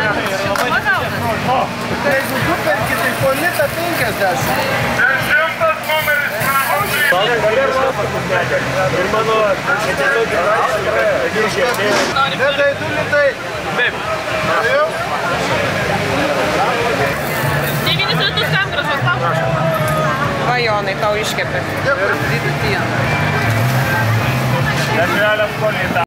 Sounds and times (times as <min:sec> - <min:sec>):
Music: 0:00.0 - 0:11.2, 0:15.3 - 0:26.0.